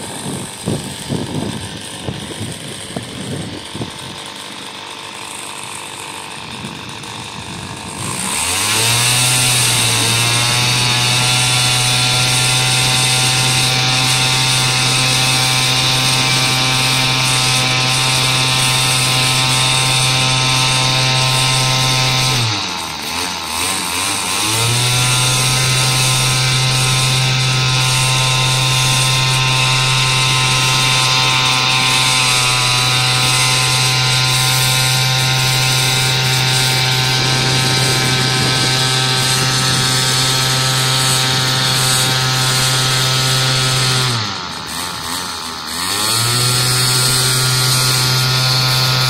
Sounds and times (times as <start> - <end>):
Motorboat, speedboat: 6.0 - 49.0.